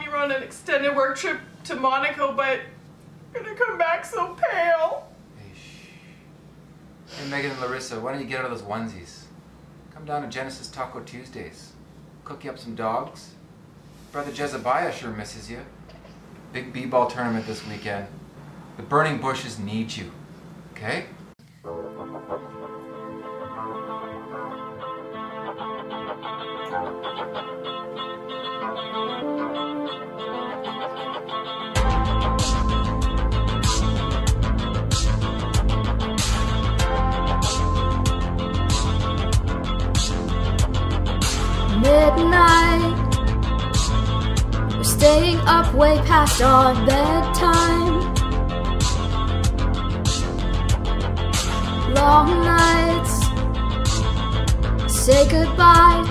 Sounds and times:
Speech: 0:00.0 - 0:02.8, 0:03.4 - 0:06.0, 0:07.1 - 0:09.3, 0:09.9 - 0:13.4, 0:14.1 - 0:15.7, 0:16.5 - 0:18.2, 0:18.8 - 0:20.2, 0:20.8 - 0:21.2, 0:54.9 - 0:56.1.

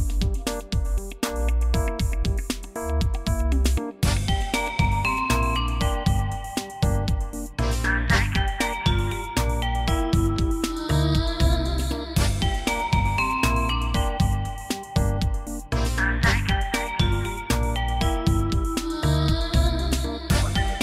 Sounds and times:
Music: 0:00.0 - 0:20.8.

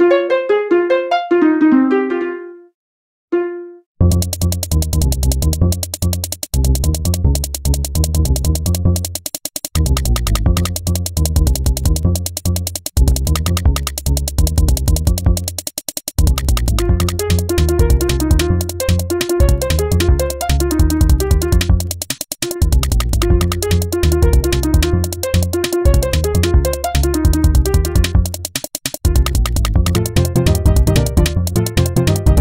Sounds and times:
Music: 0:00.0 - 0:32.4.

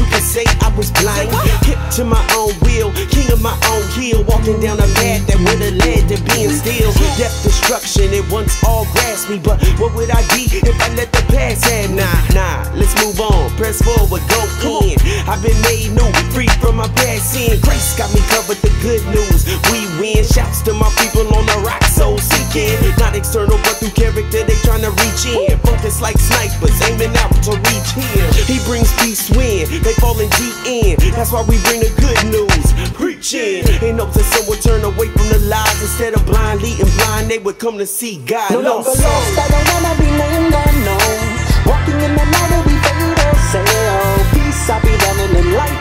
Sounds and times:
Pop music: 0:00.0 - 0:45.8.

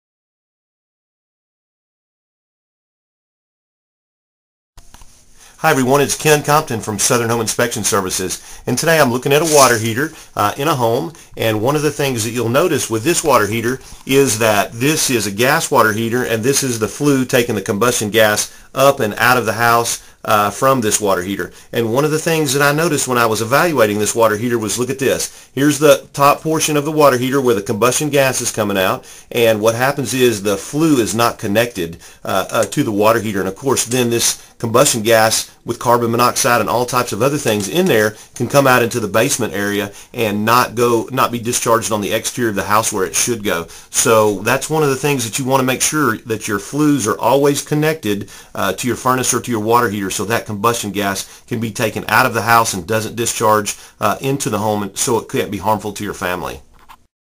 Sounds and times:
Speech: 0:05.6 - 0:56.6.

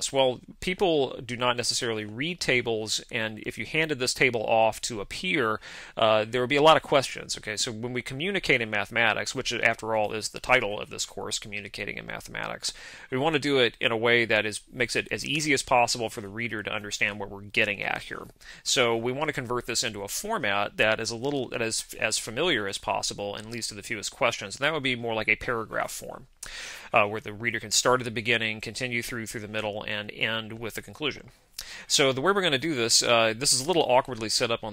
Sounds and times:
Speech: 0:00.0 - 0:26.3, 0:26.9 - 0:34.7.

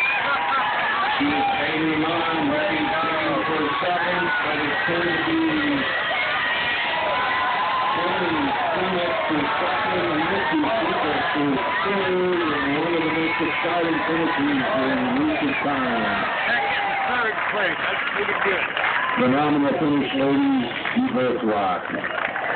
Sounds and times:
Outside, urban or manmade: 0:00.0 - 0:22.5
Speech: 0:01.2 - 0:05.8, 0:08.0 - 0:18.6, 0:19.2 - 0:21.9.

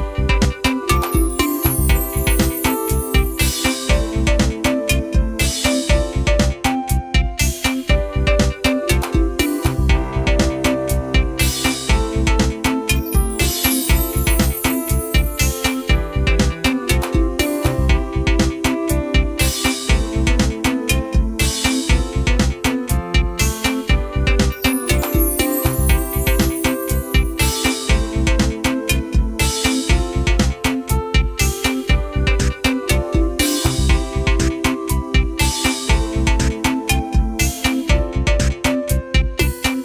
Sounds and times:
Music: 0:00.0 - 0:39.8.

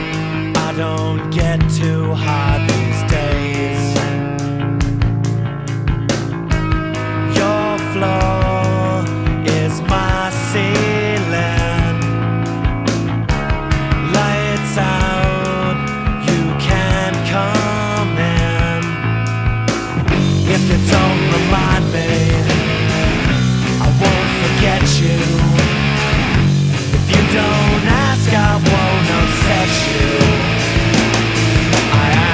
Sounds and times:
Punk rock: 0:00.0 - 0:32.3.

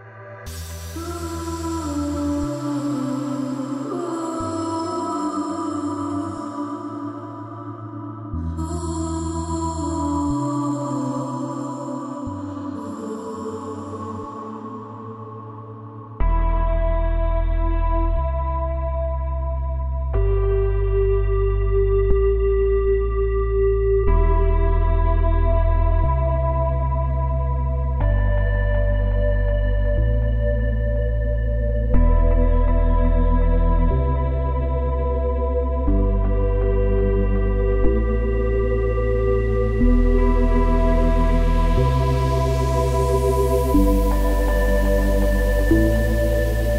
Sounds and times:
Music: 0:00.0 - 0:46.7.

